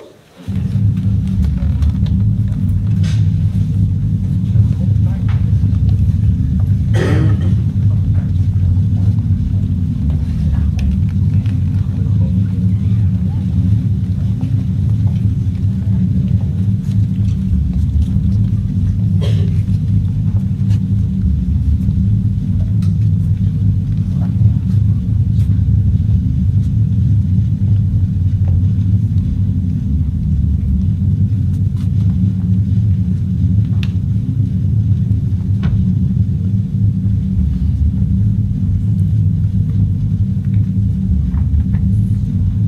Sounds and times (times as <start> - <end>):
Inside, large room or hall: 0.0 - 42.6.